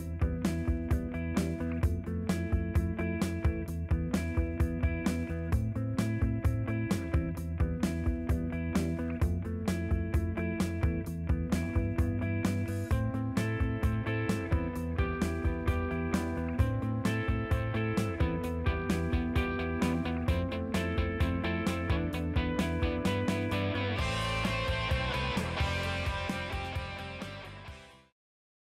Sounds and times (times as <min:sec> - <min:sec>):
Music: 0:00.0 - 0:28.2.